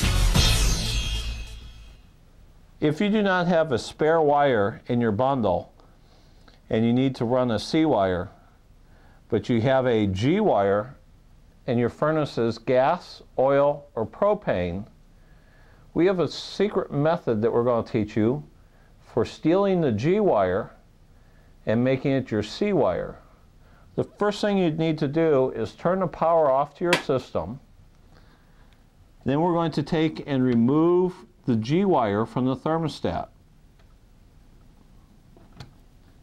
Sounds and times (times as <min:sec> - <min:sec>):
Speech: 0:02.8 - 0:05.8, 0:06.7 - 0:08.5, 0:09.3 - 0:11.0, 0:11.6 - 0:15.0, 0:16.0 - 0:20.8, 0:21.6 - 0:23.4, 0:24.0 - 0:27.7, 0:29.2 - 0:33.4.